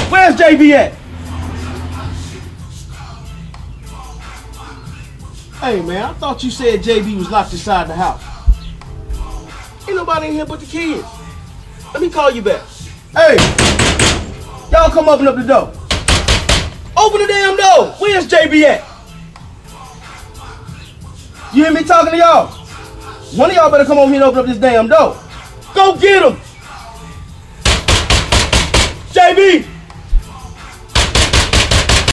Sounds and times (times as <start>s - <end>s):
Music: 0.0s - 32.1s
Speech: 14.7s - 15.7s, 17.0s - 18.9s, 29.2s - 29.7s
Knock: 31.0s - 32.1s.